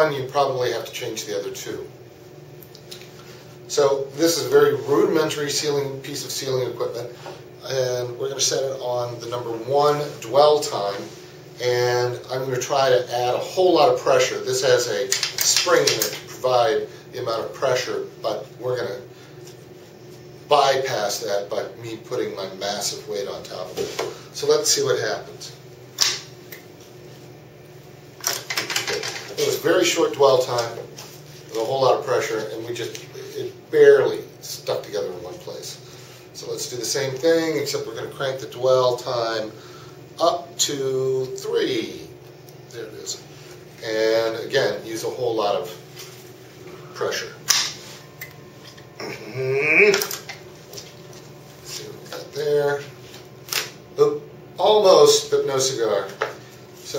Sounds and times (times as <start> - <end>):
Speech: 0.0 - 2.0, 3.7 - 19.2, 20.5 - 25.6, 28.8 - 39.6, 40.2 - 45.9, 46.9 - 47.5, 49.0 - 50.2, 51.6 - 53.0, 54.0 - 56.9
Inside, small room: 0.0 - 56.9.